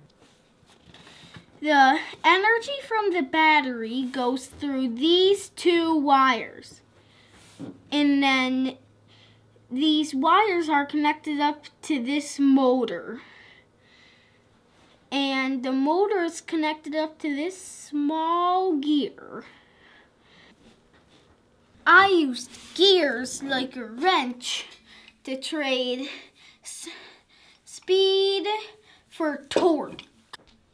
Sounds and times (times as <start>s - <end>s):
Speech: 1.6s - 6.8s, 7.9s - 8.8s, 9.7s - 13.2s, 15.1s - 19.5s, 21.8s - 27.0s, 27.7s - 30.1s.